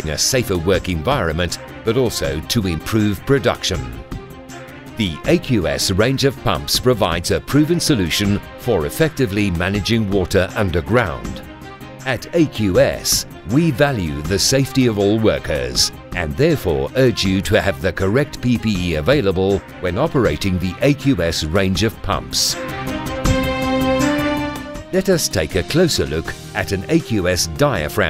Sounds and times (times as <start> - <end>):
Speech: 0.0 - 4.0, 5.0 - 11.4, 12.0 - 22.6, 25.0 - 28.0
Music: 0.0 - 28.0.